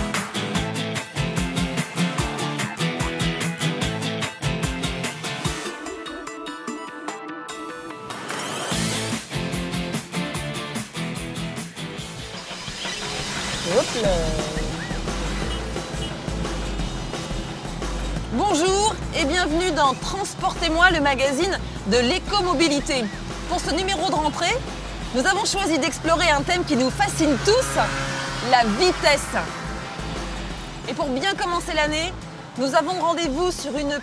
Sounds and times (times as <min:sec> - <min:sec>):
Music: 0:00.0 - 0:34.0.